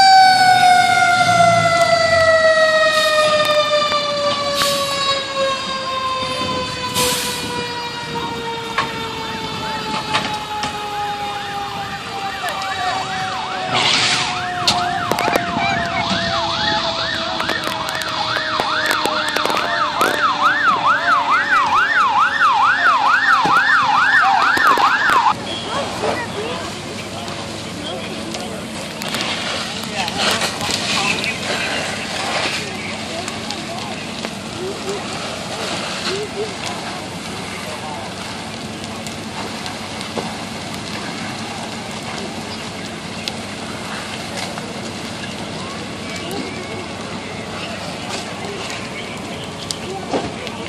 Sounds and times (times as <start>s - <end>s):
Fire engine, fire truck (siren): 0.0s - 50.6s.